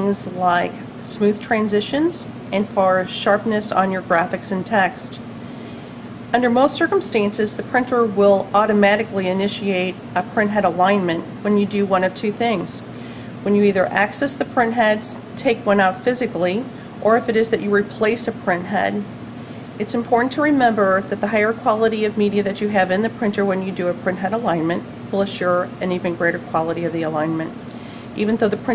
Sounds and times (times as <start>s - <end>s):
Speech: 0.0s - 5.3s, 6.3s - 19.1s, 19.8s - 27.6s, 28.2s - 28.7s.